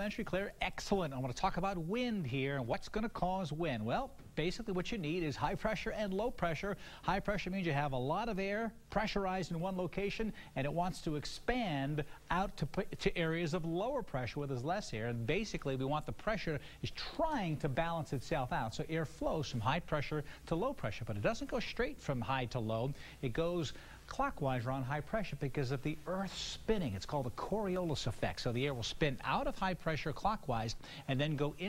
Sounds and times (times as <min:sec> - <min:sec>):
Speech: 0:00.0 - 0:31.6.